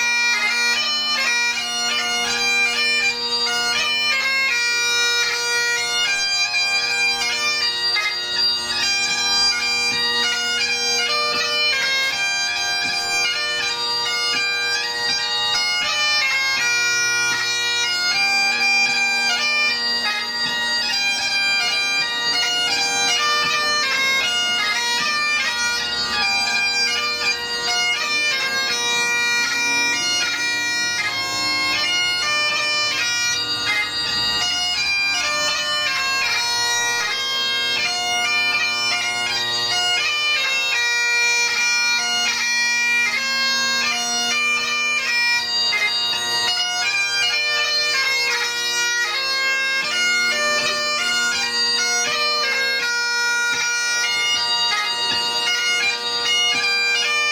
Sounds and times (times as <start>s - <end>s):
Bagpipes: 0.0s - 57.3s.